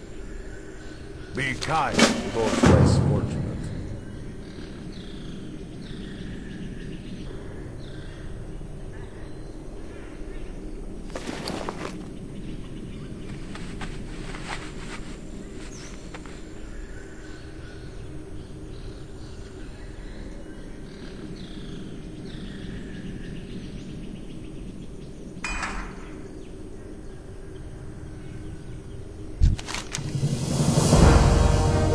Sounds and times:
Bird: 0.0 - 29.9.

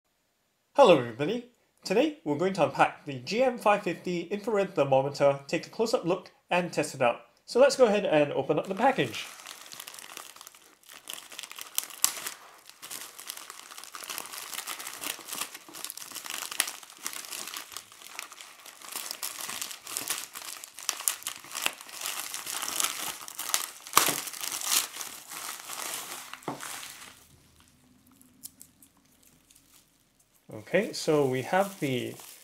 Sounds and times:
Crumpling, crinkling: 8.6 - 32.4.

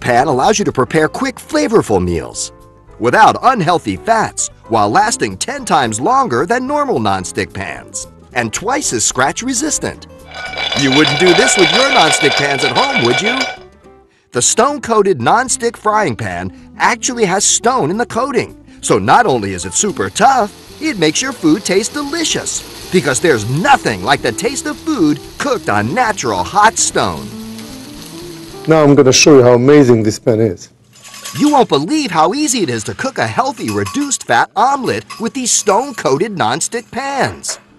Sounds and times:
Speech: 0.0 - 10.1, 10.8 - 13.6, 14.4 - 27.3, 28.7 - 30.8, 31.4 - 37.6
Music: 0.0 - 30.2, 31.4 - 37.7.

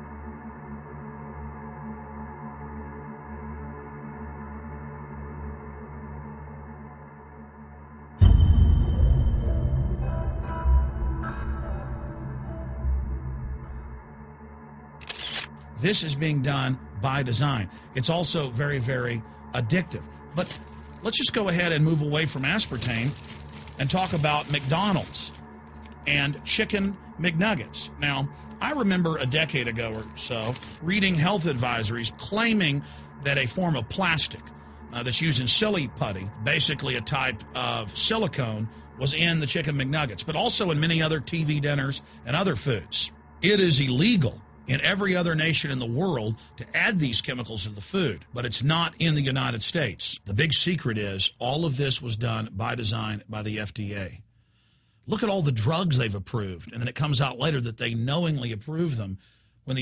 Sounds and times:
Music: 0.0 - 59.8
Speech: 15.8 - 23.2, 23.8 - 25.4, 26.1 - 34.4, 35.0 - 54.2, 55.1 - 59.8.

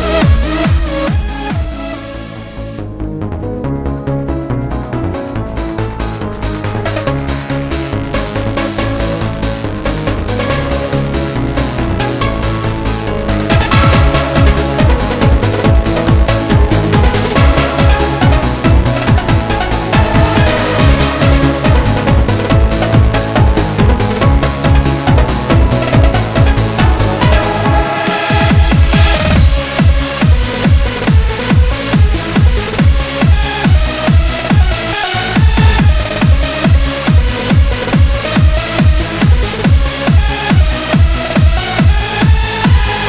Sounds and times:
Techno: 0.0 - 43.0.

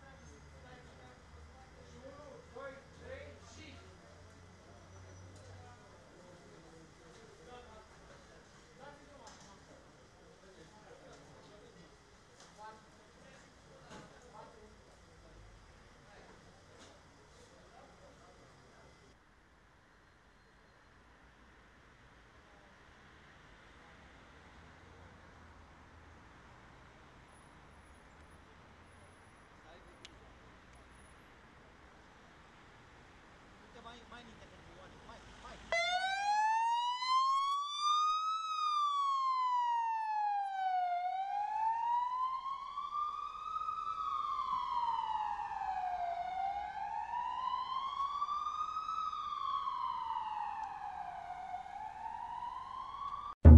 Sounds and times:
Speech: 0.0 - 19.2, 29.6 - 30.5, 33.6 - 35.7
Ambulance (siren): 35.7 - 53.5.

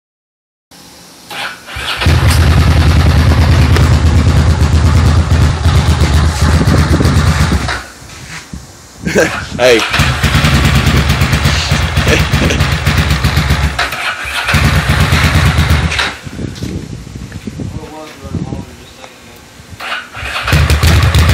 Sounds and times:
Engine: 0.8 - 8.0, 9.1 - 16.7, 19.8 - 21.3
Motorcycle: 1.3 - 7.9, 9.2 - 16.4, 19.8 - 21.3
Speech: 9.6 - 9.9, 17.7 - 19.5.

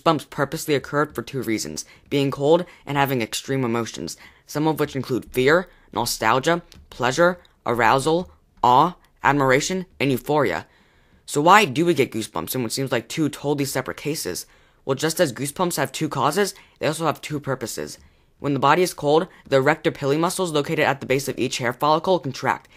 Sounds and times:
Speech: 0.0 - 10.7, 11.3 - 22.7.

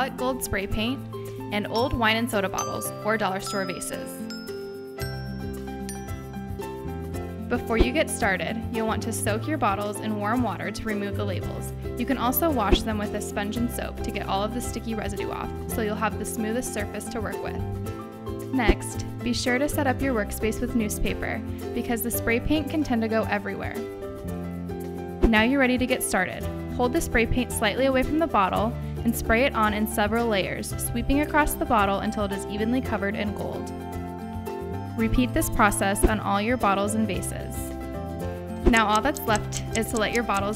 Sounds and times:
Speech: 0.0 - 4.2, 7.5 - 17.6, 18.5 - 23.8, 25.2 - 33.7, 35.0 - 37.7, 38.7 - 40.5
Music: 0.0 - 40.5.

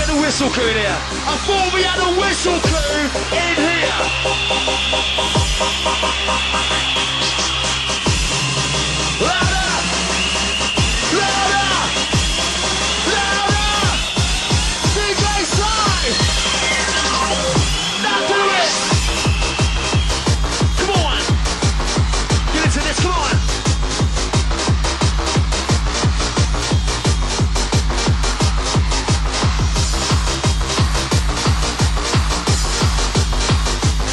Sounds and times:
Music: 0.0 - 34.1.

